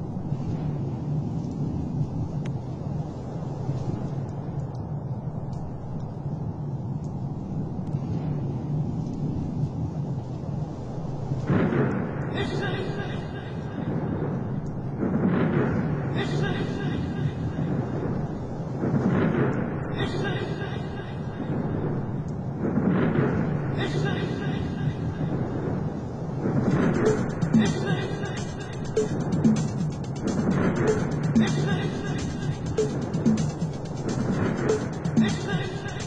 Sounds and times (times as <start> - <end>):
House music: 26.7 - 36.0.